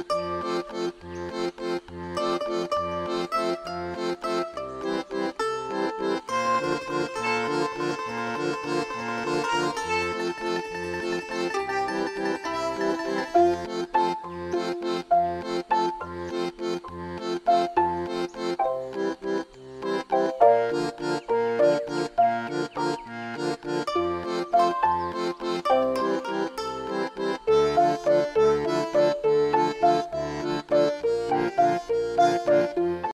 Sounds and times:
Music: 0:00.0 - 0:33.1.

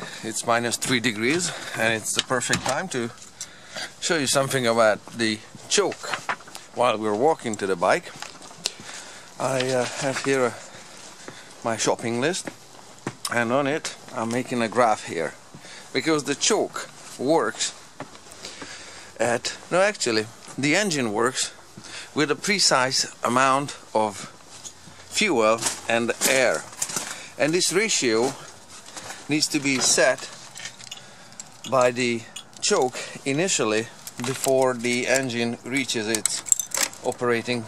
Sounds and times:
Speech: 0:00.0 - 0:03.2, 0:04.0 - 0:06.2, 0:06.8 - 0:08.2, 0:09.4 - 0:10.6, 0:11.6 - 0:12.5, 0:13.3 - 0:17.8, 0:19.2 - 0:21.6, 0:22.2 - 0:24.3, 0:25.2 - 0:26.7, 0:27.4 - 0:28.5, 0:29.3 - 0:30.4, 0:31.7 - 0:37.6.

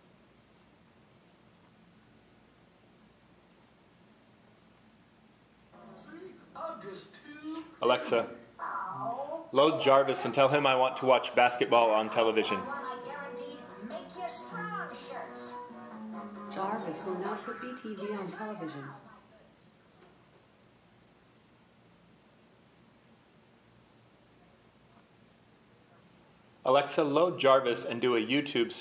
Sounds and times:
Speech: 0:05.8 - 0:15.6, 0:16.6 - 0:19.5, 0:26.7 - 0:28.8.

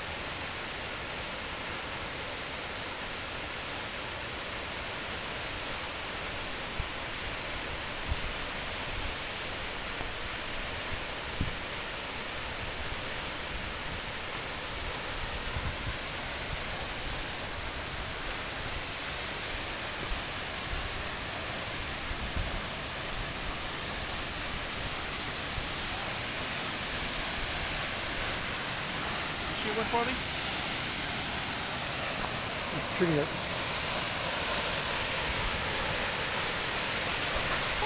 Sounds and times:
Stream: 0:00.0 - 0:37.8.

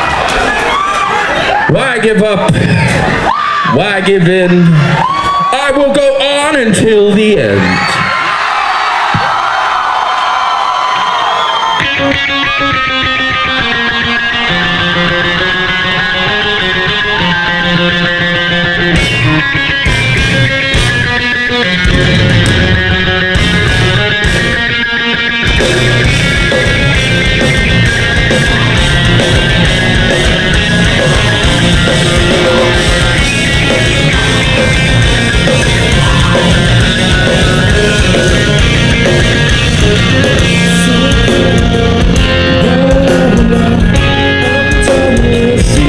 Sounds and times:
Speech: 0:05.5 - 0:07.8
Music: 0:11.4 - 0:45.8.

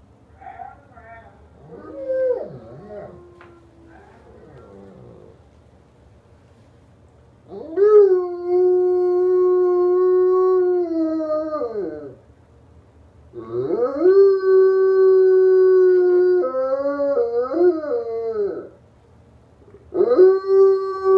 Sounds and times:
Howl: 0:00.4 - 0:05.4, 0:07.5 - 0:12.2, 0:13.4 - 0:18.8, 0:19.9 - 0:21.1.

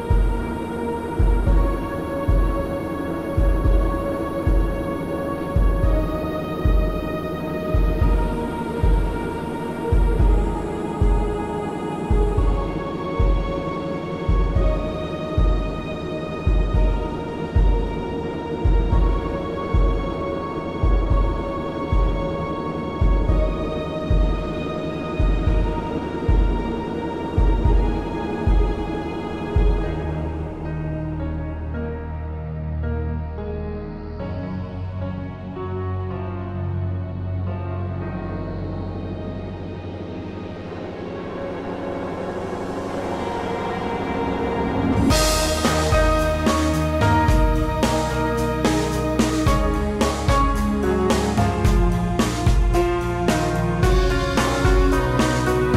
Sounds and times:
Music: 0:00.0 - 0:55.7.

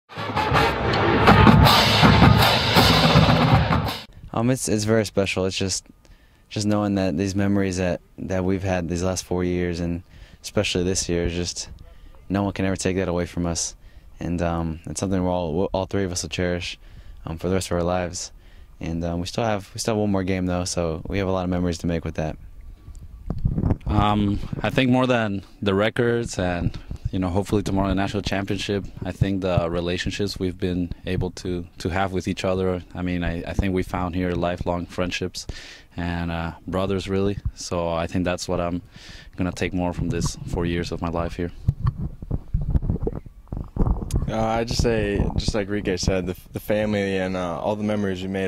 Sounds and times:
Music: 0:00.1 - 0:04.1
Speech: 0:04.3 - 0:05.9, 0:06.5 - 0:22.4, 0:23.9 - 0:38.8, 0:39.4 - 0:41.6, 0:44.1 - 0:48.4.

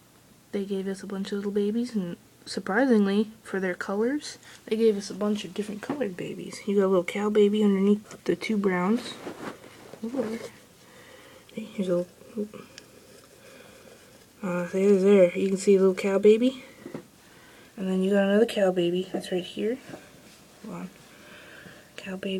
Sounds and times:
Speech: 0:00.5 - 0:09.3, 0:10.0 - 0:10.6, 0:11.5 - 0:12.7, 0:14.4 - 0:16.7, 0:17.8 - 0:20.0, 0:20.6 - 0:21.0, 0:22.0 - 0:22.4.

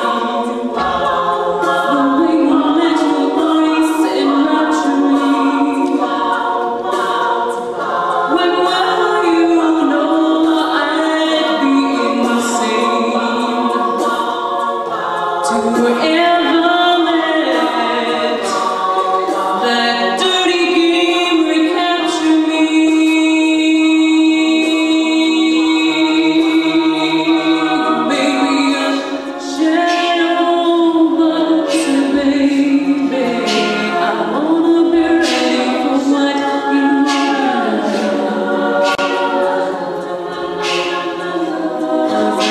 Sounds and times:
Choir: 0:00.0 - 0:42.5.

